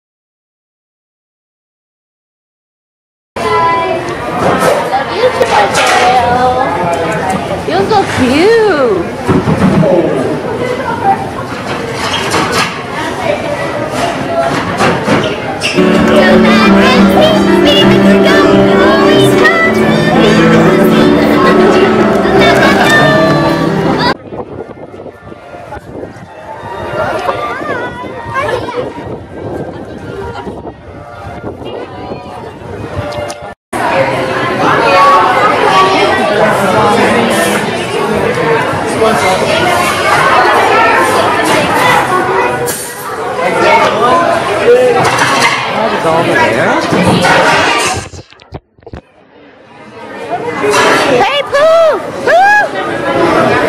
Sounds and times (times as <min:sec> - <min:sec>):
Inside, public space: 0:03.4 - 0:53.6.